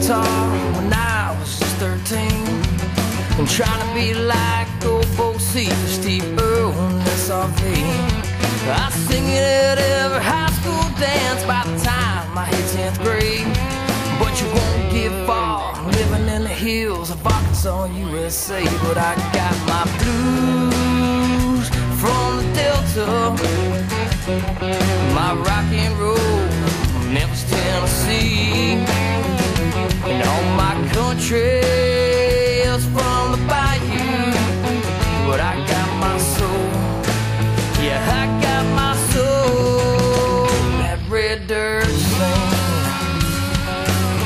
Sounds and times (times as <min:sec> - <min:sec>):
Bluegrass: 0:00.0 - 0:44.2
Rhythm and blues: 0:00.0 - 0:44.2.